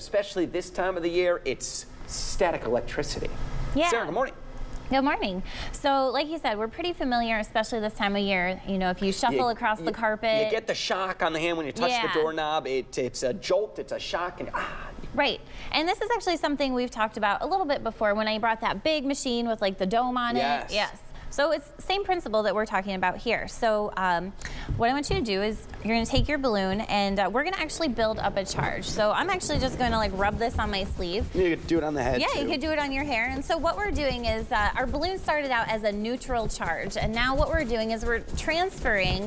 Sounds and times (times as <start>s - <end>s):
Speech: 2.2s - 14.4s, 15.2s - 24.2s, 24.8s - 39.2s.